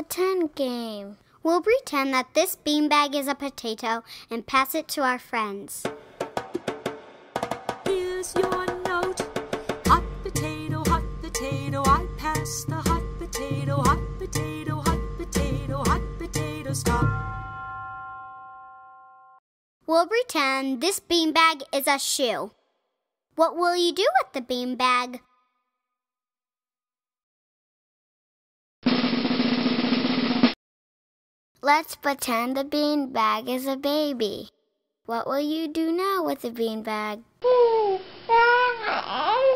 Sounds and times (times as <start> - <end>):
Speech: 0.0 - 5.9, 19.9 - 22.5, 23.4 - 25.2, 31.6 - 34.5, 35.1 - 37.2.